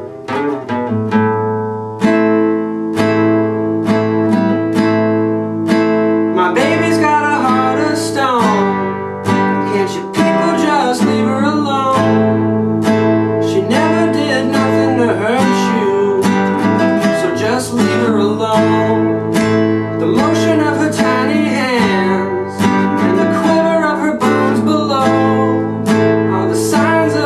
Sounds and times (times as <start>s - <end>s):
Music: 0.0s - 27.2s.